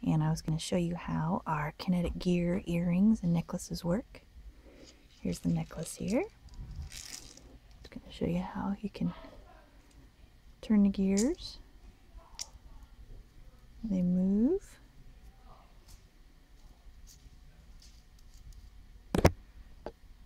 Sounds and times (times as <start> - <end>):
Speech: 0.0 - 4.2, 5.2 - 6.3, 7.8 - 9.8, 10.6 - 15.8
Inside, small room: 0.0 - 20.2.